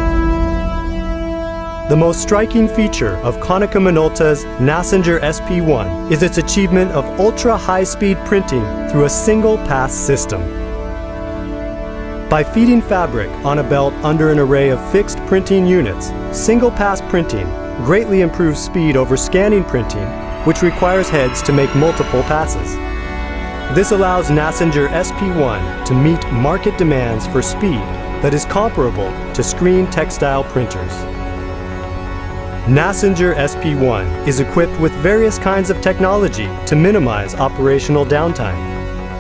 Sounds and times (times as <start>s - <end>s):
Music: 0.0s - 39.2s
Speech: 1.9s - 10.5s, 12.3s - 22.8s, 23.7s - 31.0s, 32.7s - 38.6s.